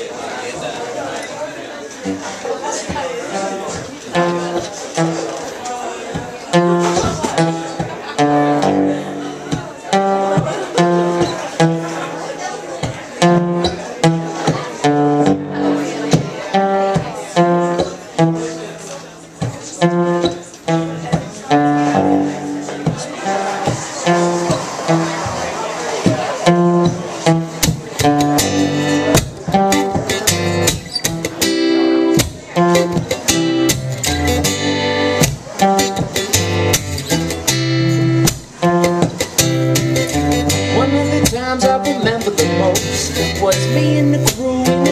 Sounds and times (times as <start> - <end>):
Speech: 0.0 - 33.3, 40.6 - 44.9
Music: 2.9 - 44.9.